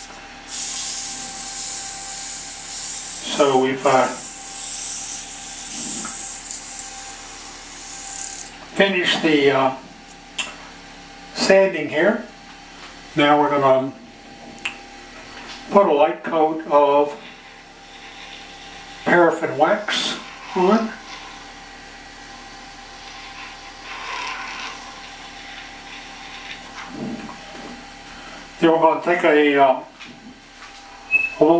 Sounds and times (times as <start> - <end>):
Speech: 3.2 - 4.2, 8.8 - 9.8, 11.4 - 12.3, 13.2 - 14.0, 15.7 - 17.2, 19.1 - 21.0, 28.6 - 30.0
Tools: 5.0 - 6.6.